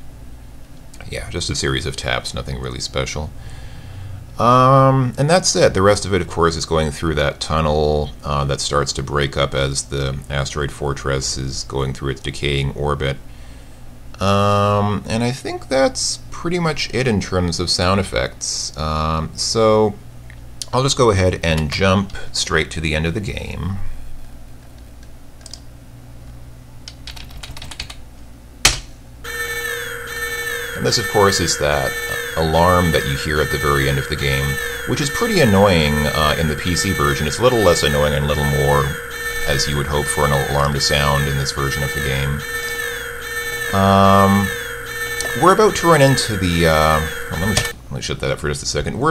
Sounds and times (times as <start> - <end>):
Speech: 1.0 - 3.4, 4.4 - 13.2, 14.2 - 20.0, 20.6 - 23.9, 30.8 - 42.4, 43.7 - 44.6, 45.3 - 49.1
Typing: 26.9 - 28.0.